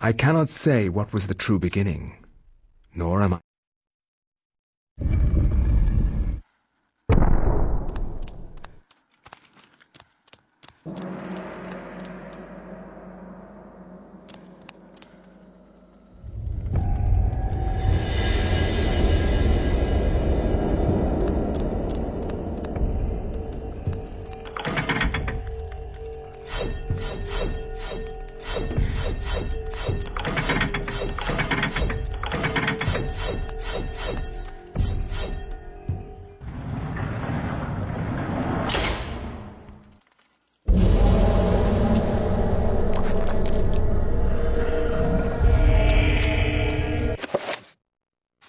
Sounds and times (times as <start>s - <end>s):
Music: 10.8s - 36.5s, 40.7s - 47.2s.